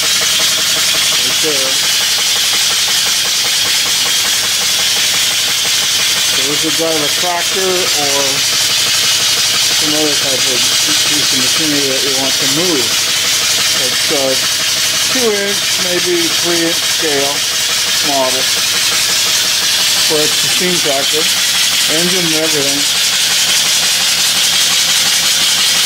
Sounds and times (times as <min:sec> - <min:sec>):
Speech: 0:01.2 - 0:01.8, 0:06.4 - 0:08.4, 0:09.8 - 0:13.0, 0:13.8 - 0:14.5, 0:15.1 - 0:17.4, 0:18.0 - 0:18.5, 0:20.0 - 0:21.3, 0:21.9 - 0:22.9.